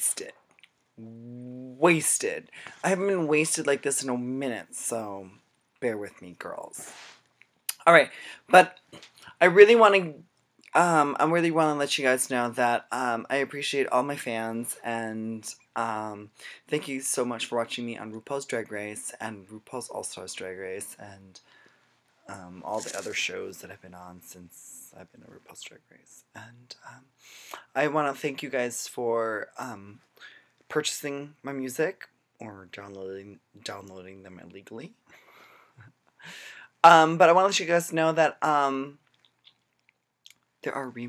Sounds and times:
Speech: 0.0s - 0.4s, 1.0s - 7.0s, 7.7s - 21.5s, 22.3s - 27.0s, 27.6s - 30.1s, 30.7s - 35.0s, 36.8s - 39.0s, 40.6s - 41.0s.

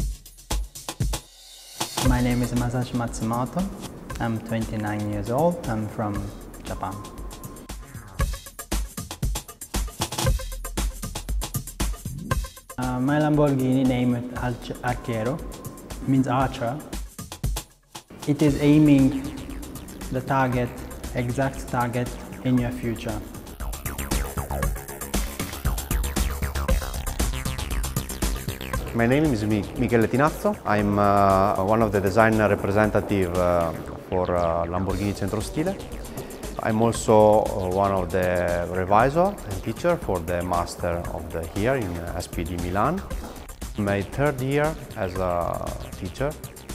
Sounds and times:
Music: 0.0s - 46.7s
Speech: 2.0s - 7.0s, 12.8s - 15.4s, 16.1s - 16.9s, 18.2s - 19.3s, 20.1s - 23.2s, 29.0s - 35.8s, 36.6s - 43.1s, 43.8s - 46.4s.

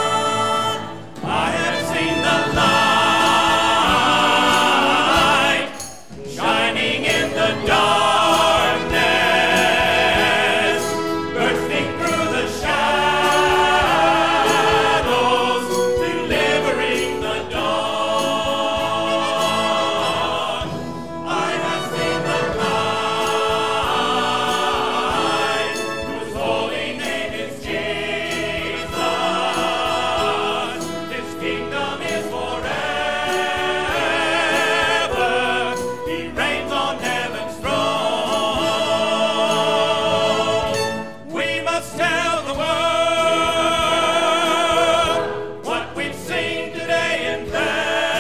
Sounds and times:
Choir: 0.0s - 48.2s.

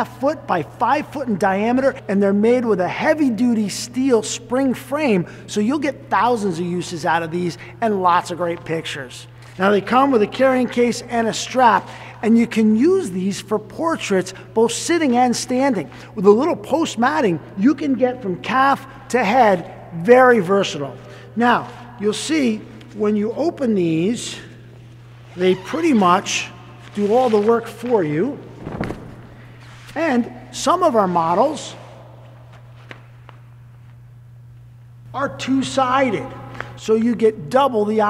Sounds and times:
Speech: 0.0s - 24.6s, 25.4s - 28.4s, 30.0s - 31.9s, 35.1s - 38.1s.

